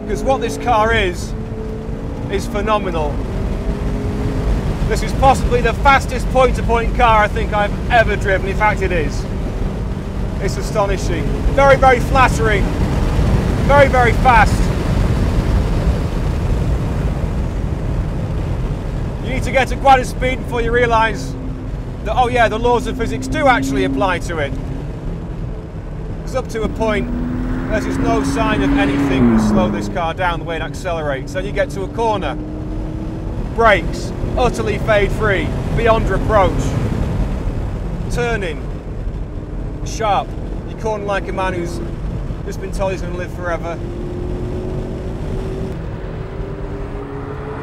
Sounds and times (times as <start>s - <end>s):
Car: 0.0s - 47.6s.